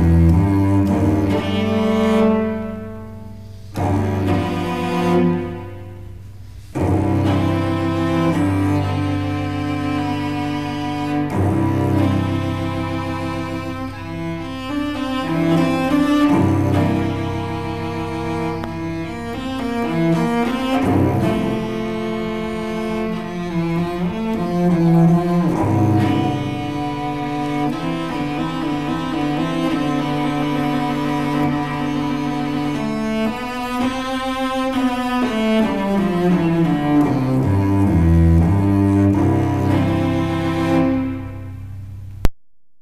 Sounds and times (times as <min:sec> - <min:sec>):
Cello: 0:00.0 - 0:42.3.